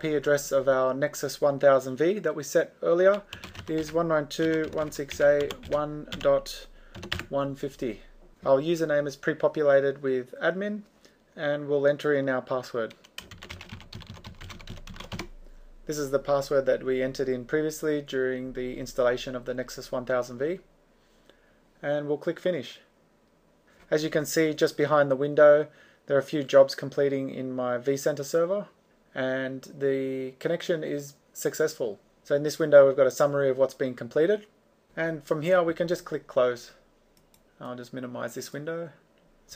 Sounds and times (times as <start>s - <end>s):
Speech: 0.0s - 13.0s, 15.9s - 20.6s, 21.8s - 22.9s, 23.9s - 36.8s, 37.6s - 39.5s
Typing: 3.1s - 6.3s, 6.9s - 7.3s, 12.9s - 15.3s.